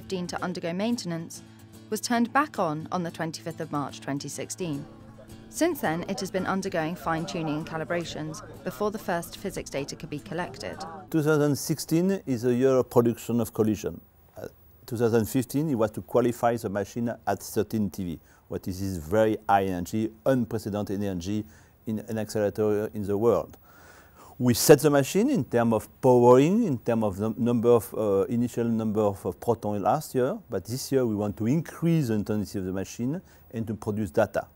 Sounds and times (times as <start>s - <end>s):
Speech: 0.0s - 4.9s, 5.5s - 23.6s, 24.4s - 34.5s.